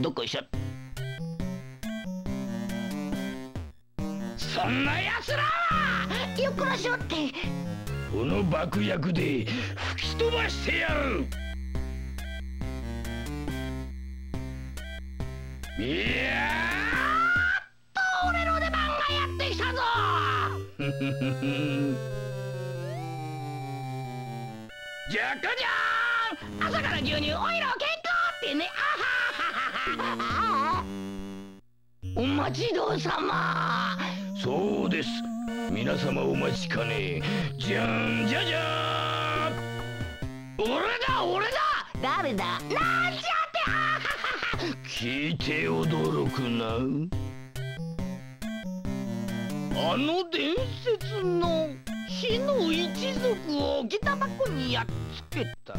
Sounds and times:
Music: 0.0 - 17.5, 18.2 - 28.8, 29.9 - 55.7
Speech: 18.0 - 20.6, 32.2 - 39.6, 40.6 - 43.7, 44.9 - 47.1, 49.8 - 55.7.

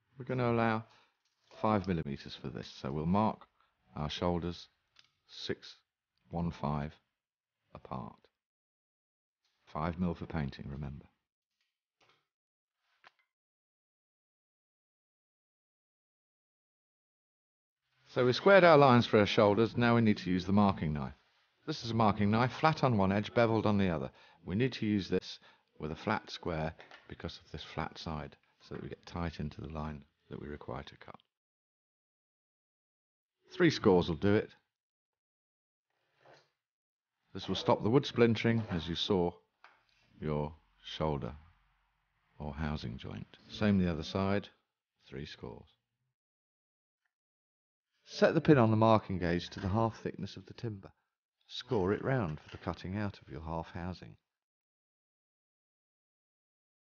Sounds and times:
Speech: 0.2 - 7.0, 7.8 - 8.3, 9.7 - 11.1, 18.1 - 31.3, 33.5 - 34.6, 37.4 - 39.4, 40.2 - 41.5, 42.4 - 45.8, 48.1 - 50.9, 51.5 - 54.2.

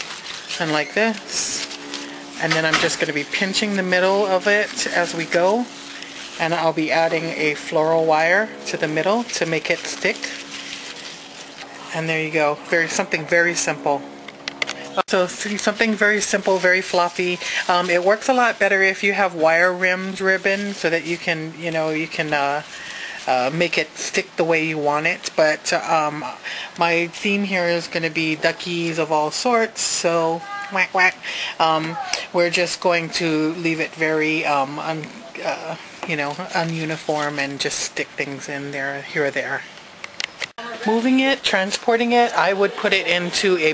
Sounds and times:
Child speech, kid speaking: 30.2 - 31.0, 31.6 - 32.4, 40.6 - 41.0.

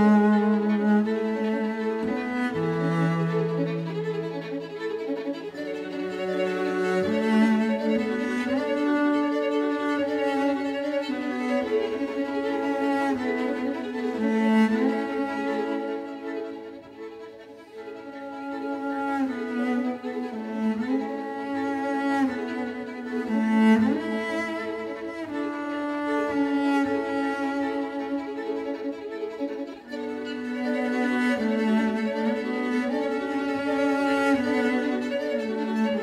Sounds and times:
Cello: 0.0 - 36.0.

